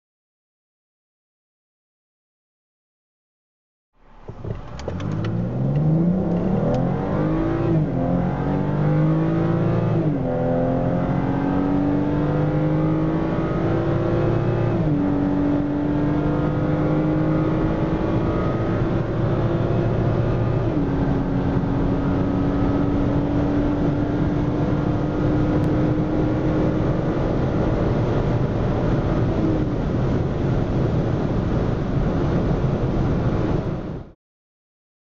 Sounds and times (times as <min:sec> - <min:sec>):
Car: 0:04.0 - 0:34.2
Medium engine (mid frequency): 0:04.0 - 0:34.2
Accelerating, revving, vroom: 0:04.8 - 0:29.7.